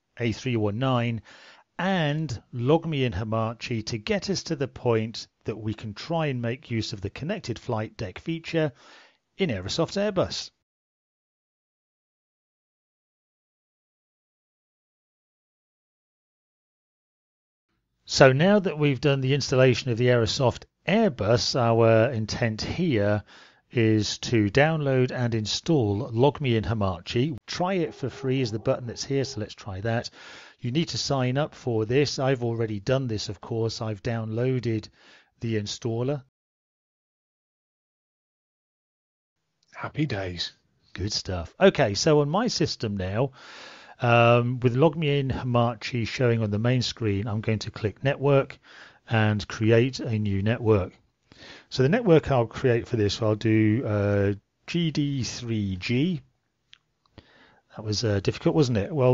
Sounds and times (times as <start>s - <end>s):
Speech: 0.2s - 1.2s, 1.8s - 8.8s, 9.4s - 10.6s, 18.1s - 36.3s, 39.8s - 43.4s, 44.0s - 51.0s, 51.7s - 56.3s, 57.7s - 59.1s.